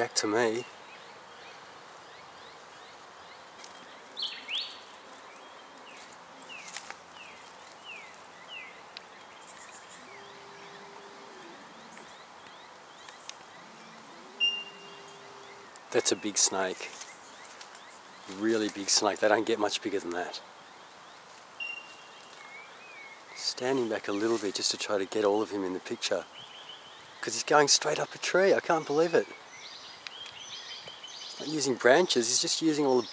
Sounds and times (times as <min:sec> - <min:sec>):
Outside, rural or natural: 0:00.0 - 0:33.1.